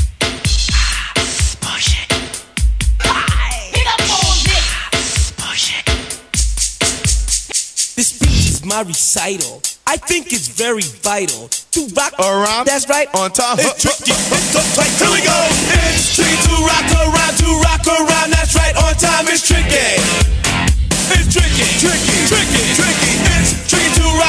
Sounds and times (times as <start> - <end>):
Rhythm and blues: 0.0 - 24.2
Dance music: 3.0 - 9.3, 9.9 - 24.2.